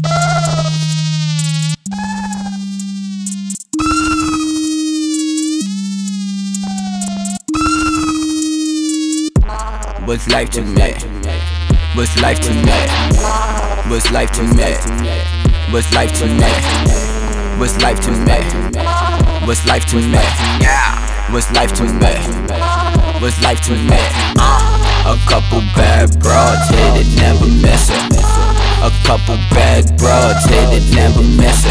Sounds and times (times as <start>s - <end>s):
Music: 0.0s - 31.7s.